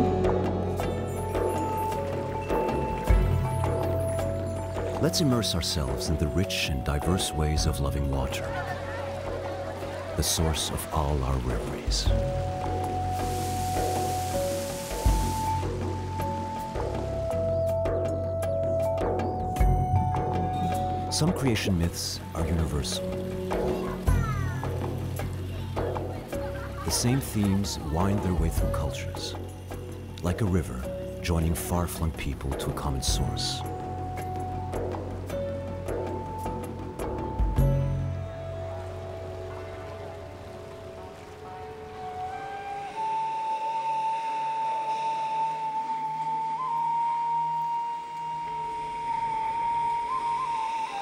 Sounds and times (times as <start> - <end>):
Waterfall: 0.0 - 18.2, 20.2 - 51.0
Music: 0.0 - 51.0
Stream: 0.0 - 51.0
Speech: 5.0 - 9.0, 10.2 - 12.2, 21.1 - 23.1, 26.4 - 29.4, 30.2 - 33.6.